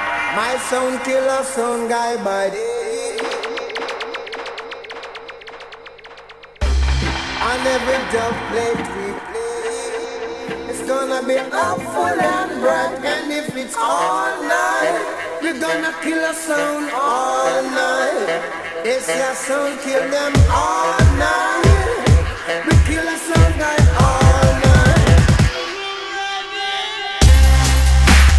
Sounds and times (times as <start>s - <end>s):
Music: 0.0s - 28.3s.